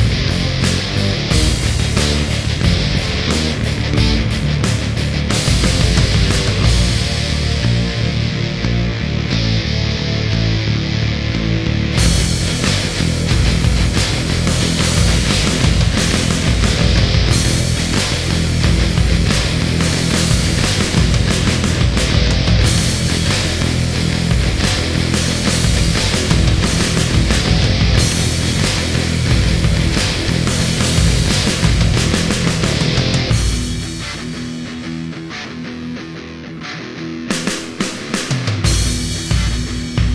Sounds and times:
Heavy metal: 0.0 - 40.1
Progressive rock: 0.0 - 40.1.

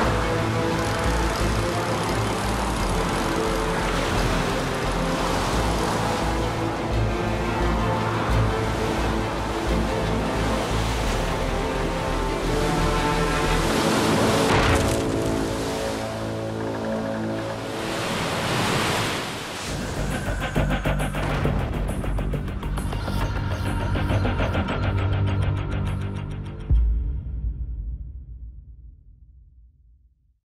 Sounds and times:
Music: 0.0 - 30.0.

